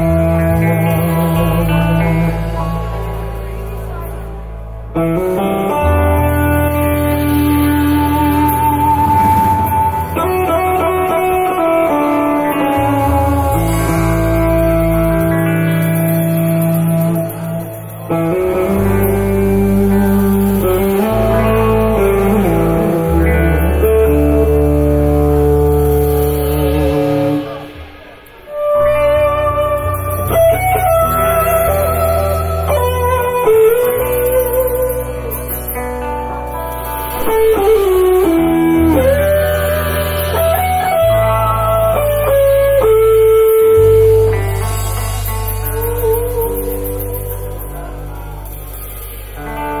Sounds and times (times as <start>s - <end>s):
Strum: 0.0s - 49.8s.